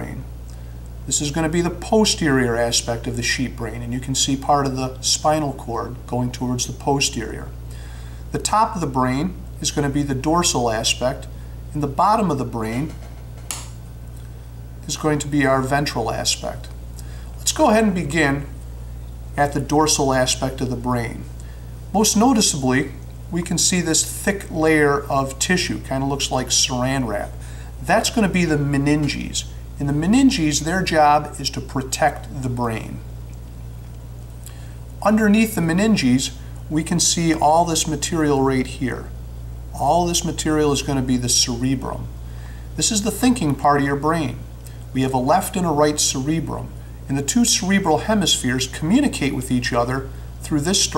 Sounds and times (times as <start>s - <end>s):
Speech: 0.0s - 0.3s, 1.1s - 7.6s, 8.3s - 13.0s, 14.8s - 16.8s, 17.4s - 18.6s, 19.4s - 21.3s, 21.9s - 33.0s, 35.0s - 42.1s, 42.8s - 50.9s.